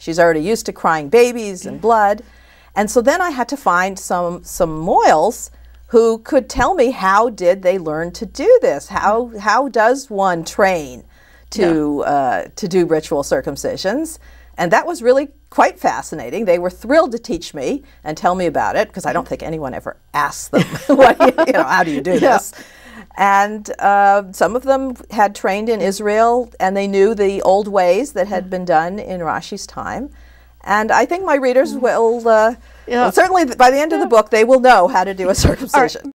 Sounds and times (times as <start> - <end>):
Female speech, woman speaking: 0.0 - 2.2, 2.8 - 22.5, 23.2 - 36.1.